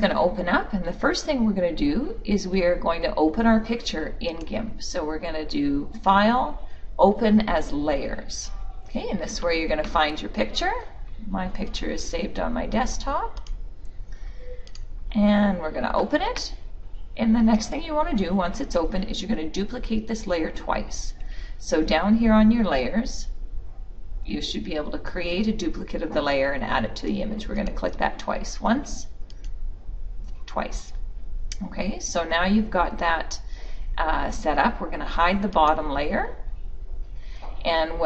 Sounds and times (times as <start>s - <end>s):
Speech: 0.0s - 13.4s, 15.1s - 16.6s, 17.2s - 23.3s, 24.3s - 29.1s, 30.5s - 31.0s, 31.6s - 33.4s, 34.0s - 36.5s, 37.6s - 38.0s.